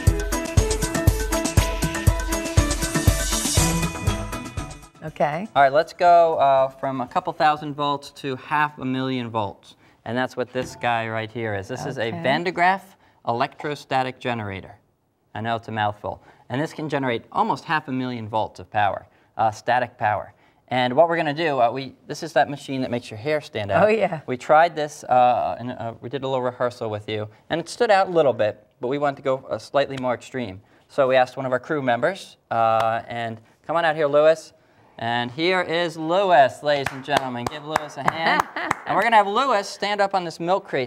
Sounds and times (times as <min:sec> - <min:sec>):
Speech: 0:05.0 - 0:14.8, 0:15.4 - 0:40.8.